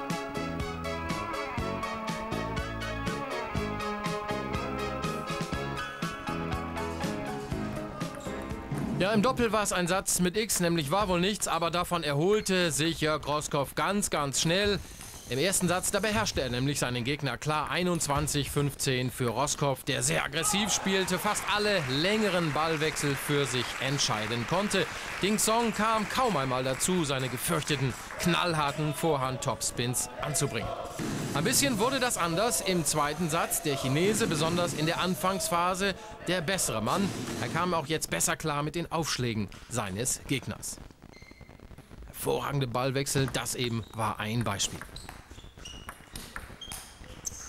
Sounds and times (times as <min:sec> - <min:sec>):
Speech: 0:09.0 - 0:40.8, 0:42.2 - 0:44.8.